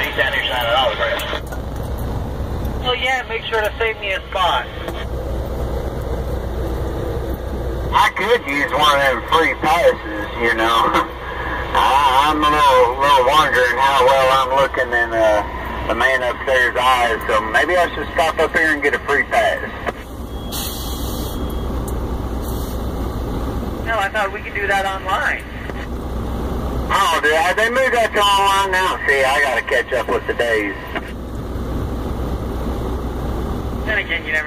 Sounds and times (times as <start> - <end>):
Speech: 0.0 - 1.4, 8.0 - 11.1, 11.7 - 19.8, 23.9 - 25.6, 26.9 - 31.0, 33.8 - 34.4.